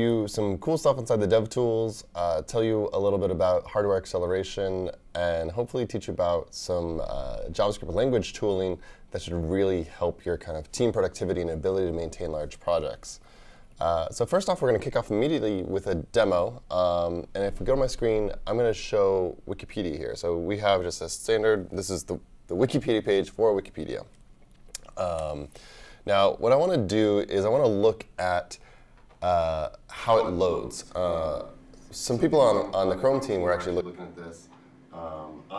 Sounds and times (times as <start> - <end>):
Speech: 0.0 - 13.2, 13.8 - 24.1, 24.8 - 25.5, 26.1 - 28.6, 29.2 - 35.5.